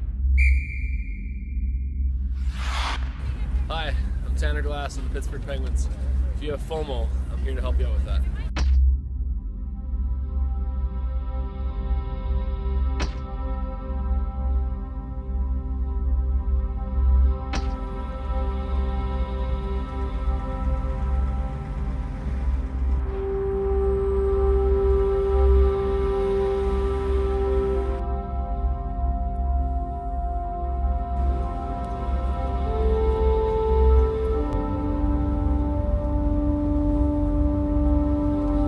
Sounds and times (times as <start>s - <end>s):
Music: 0.0s - 38.6s.